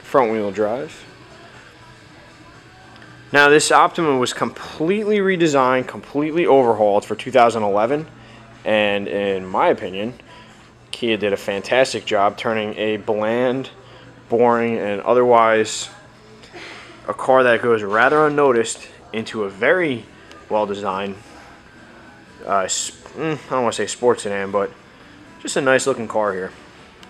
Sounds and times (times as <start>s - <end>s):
Speech: 0.0s - 1.1s, 3.3s - 10.2s, 10.9s - 16.2s, 17.0s - 21.2s, 22.4s - 24.8s, 25.4s - 26.6s.